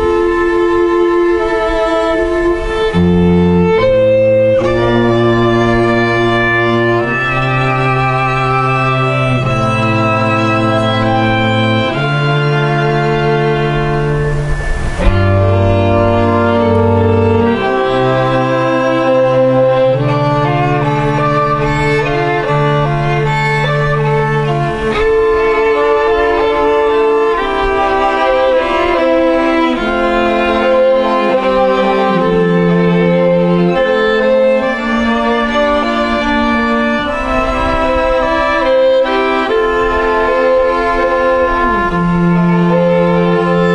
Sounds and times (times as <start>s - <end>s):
Violin, fiddle: 0.0s - 43.7s.